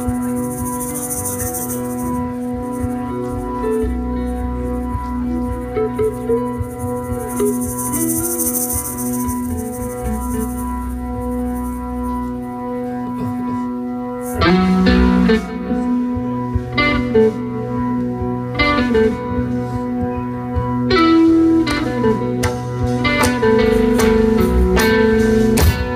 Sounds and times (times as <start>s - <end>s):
Ambient music: 0.0s - 25.9s.